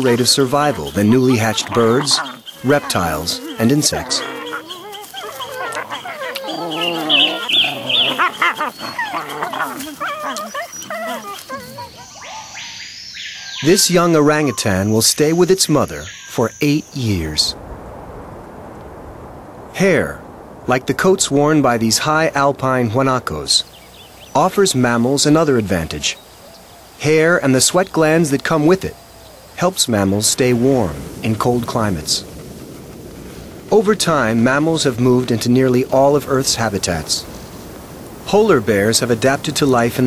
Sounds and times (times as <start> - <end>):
Speech: 0.0 - 4.3, 13.6 - 17.6, 19.8 - 23.7, 24.4 - 26.2, 27.0 - 29.0, 29.6 - 32.2, 33.7 - 37.3, 38.3 - 40.0
Wild animals: 0.0 - 14.9
Outside, rural or natural: 0.0 - 40.0.